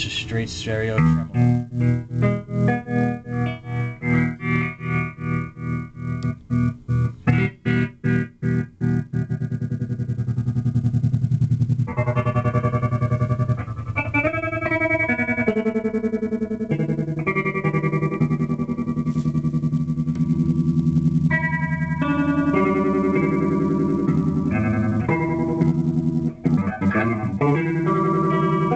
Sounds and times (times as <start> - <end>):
Effects unit: 0.0 - 28.7
Guitar: 0.0 - 28.7.